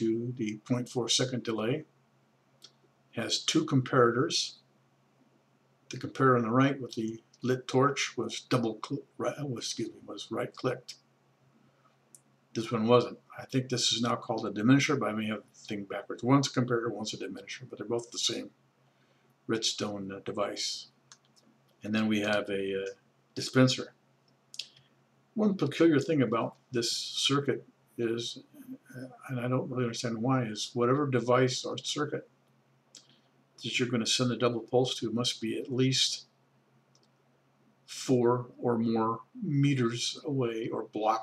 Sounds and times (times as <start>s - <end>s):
Speech: 0.0s - 1.9s, 3.2s - 4.6s, 5.9s - 11.0s, 12.6s - 18.5s, 19.5s - 21.0s, 21.8s - 23.9s, 25.4s - 32.2s, 33.6s - 36.3s, 37.9s - 41.2s.